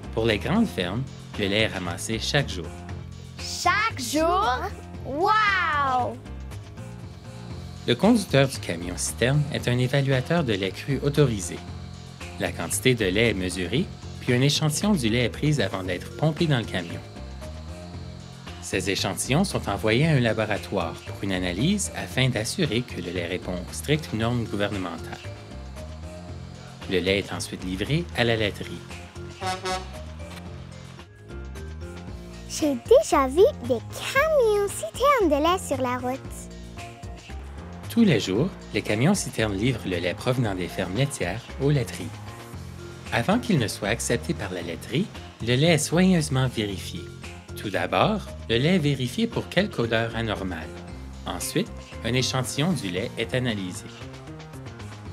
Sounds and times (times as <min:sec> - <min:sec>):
Music: 0:00.0 - 0:55.1
Speech: 0:00.2 - 0:02.7, 0:03.4 - 0:06.2, 0:07.9 - 0:11.6, 0:12.4 - 0:17.1, 0:18.6 - 0:25.3, 0:26.9 - 0:28.8, 0:32.5 - 0:36.4, 0:37.9 - 0:42.2, 0:43.1 - 0:50.7, 0:51.3 - 0:54.0.